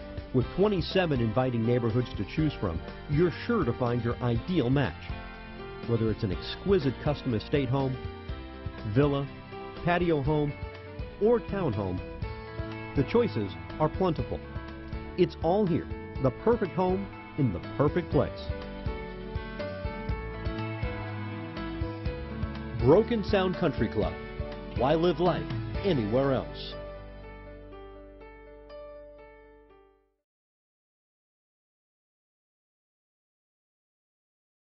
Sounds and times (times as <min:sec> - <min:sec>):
Music: 0:00.0 - 0:30.2
Speech: 0:00.4 - 0:05.1, 0:05.9 - 0:08.0, 0:08.8 - 0:10.6, 0:11.2 - 0:12.0, 0:13.0 - 0:14.4, 0:15.2 - 0:18.5, 0:22.8 - 0:24.2, 0:24.8 - 0:26.8.